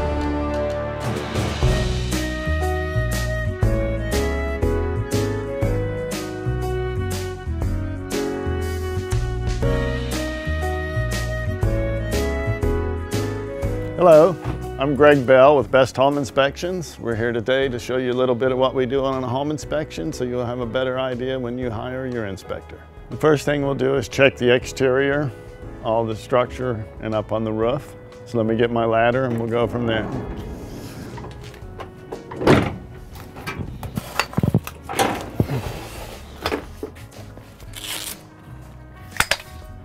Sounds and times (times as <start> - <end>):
Music: 0.0 - 39.8
Speech: 14.0 - 30.2.